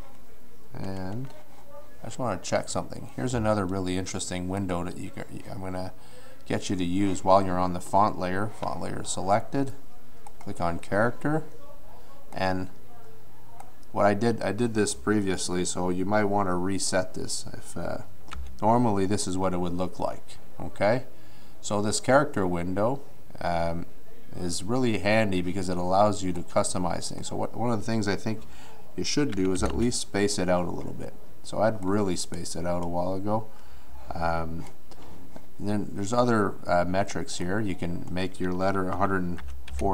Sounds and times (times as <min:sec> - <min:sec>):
Speech: 0:00.0 - 0:33.5, 0:34.1 - 0:34.7, 0:35.6 - 0:39.9.